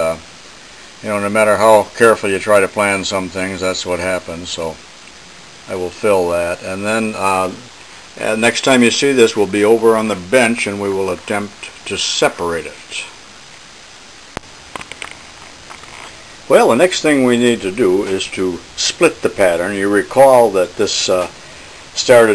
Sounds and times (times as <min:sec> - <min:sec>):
Speech: 0:00.0 - 0:00.2, 0:01.0 - 0:04.8, 0:05.7 - 0:13.2, 0:16.5 - 0:21.4, 0:22.0 - 0:22.3.